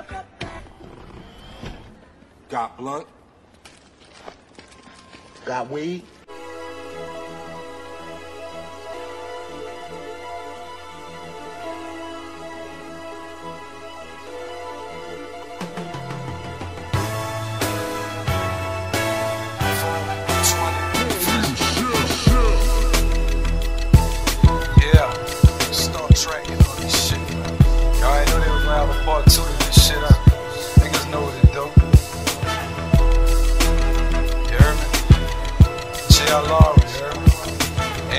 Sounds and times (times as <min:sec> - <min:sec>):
Speech: 0:02.5 - 0:03.2, 0:05.4 - 0:06.1, 0:24.7 - 0:27.3, 0:28.0 - 0:30.2, 0:30.8 - 0:31.8, 0:36.1 - 0:37.3
Music: 0:06.3 - 0:38.1.